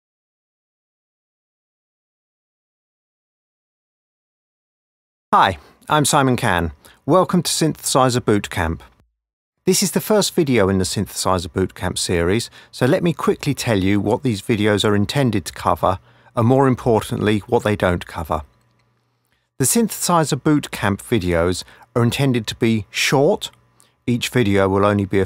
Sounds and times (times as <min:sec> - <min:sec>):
Speech: 0:05.4 - 0:09.0, 0:09.7 - 0:18.5, 0:19.6 - 0:25.2.